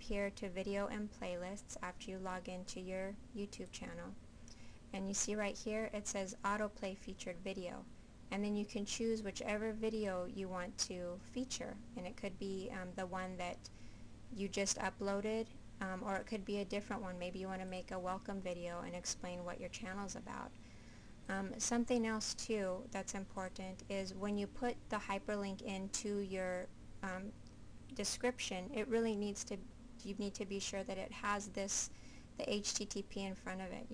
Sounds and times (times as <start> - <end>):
Speech: 0.0 - 4.2, 4.9 - 13.7, 14.3 - 20.6, 21.3 - 33.9.